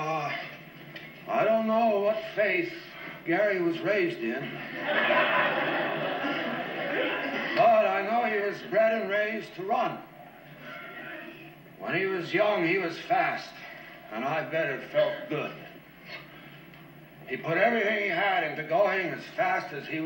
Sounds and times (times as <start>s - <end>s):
Speech: 0.0s - 0.6s, 1.3s - 4.6s, 7.6s - 10.1s, 11.1s - 15.8s, 17.3s - 20.0s.